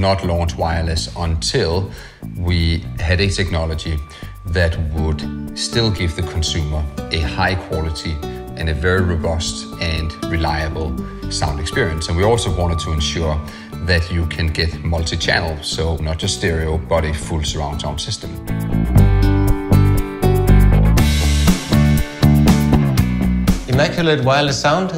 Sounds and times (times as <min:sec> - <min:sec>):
Speech: 0:00.0 - 0:18.4, 0:23.7 - 0:24.9
Music: 0:00.0 - 0:24.9.